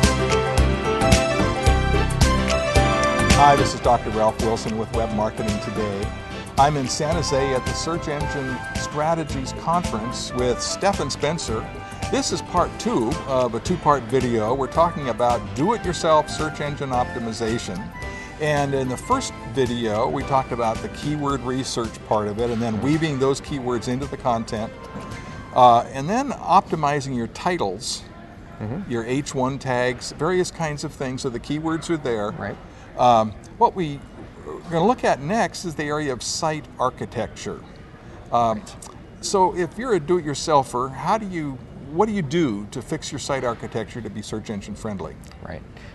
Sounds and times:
Speech: 0:03.4 - 0:11.6, 0:25.6 - 0:37.7, 0:38.3 - 0:45.7.

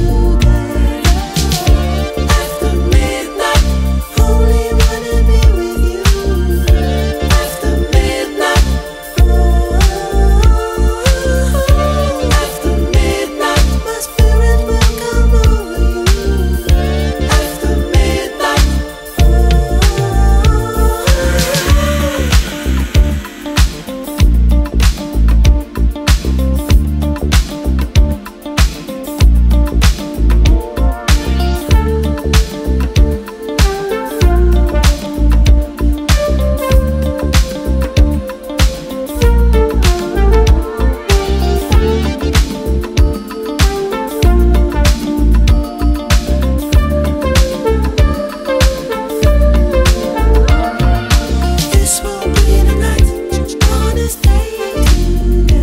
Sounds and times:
Funk: 0:00.0 - 0:55.6.

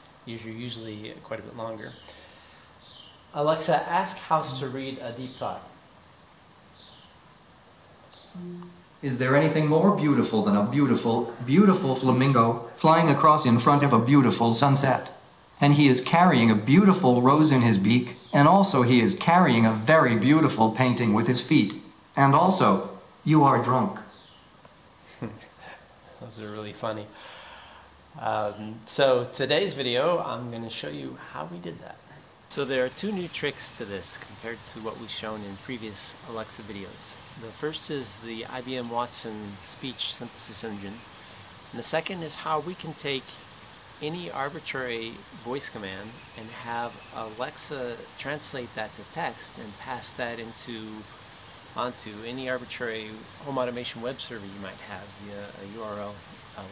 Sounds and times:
Speech: 0:00.3 - 0:02.1, 0:03.3 - 0:05.8, 0:08.4 - 0:24.1, 0:26.2 - 0:27.2, 0:28.2 - 0:41.0, 0:41.7 - 0:43.4, 0:44.0 - 0:51.1, 0:51.8 - 0:56.7.

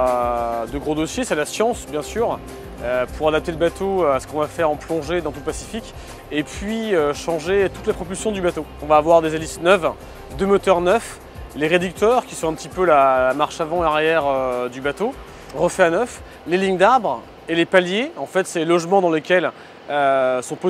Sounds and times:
Music: 0:00.0 - 0:18.1
Speech: 0:00.0 - 0:20.6.

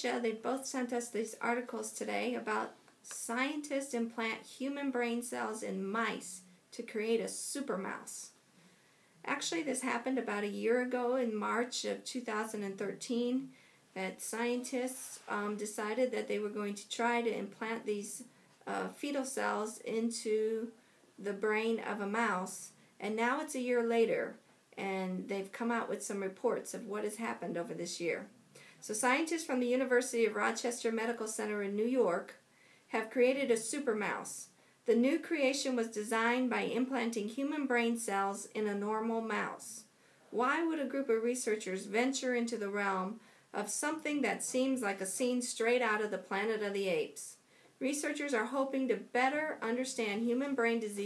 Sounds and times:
Speech: 0:00.0 - 0:08.4, 0:09.3 - 0:51.0.

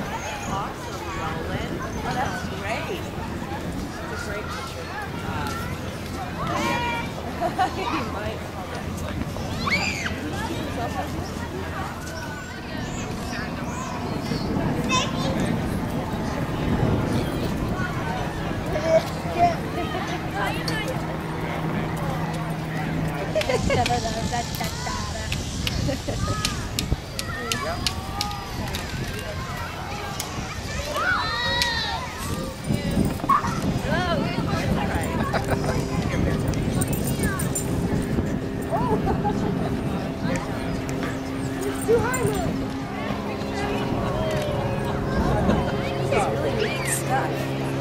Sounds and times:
Child speech, kid speaking: 0:00.0 - 0:08.8, 0:09.4 - 0:23.2, 0:24.5 - 0:25.3, 0:26.2 - 0:37.9, 0:40.2 - 0:47.8
Outside, rural or natural: 0:00.0 - 0:47.8.

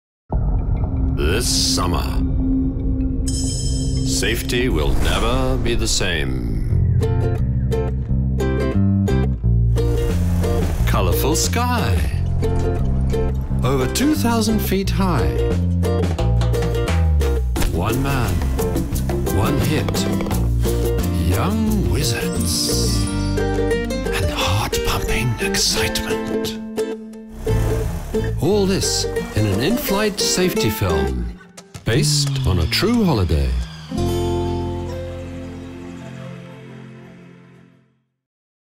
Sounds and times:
Music: 0:00.3 - 0:38.3
Speech: 0:01.2 - 0:02.3, 0:04.1 - 0:06.8, 0:10.9 - 0:12.2, 0:13.6 - 0:15.5, 0:17.6 - 0:18.4, 0:19.3 - 0:20.2, 0:21.1 - 0:23.1, 0:24.1 - 0:26.6, 0:28.4 - 0:33.7.

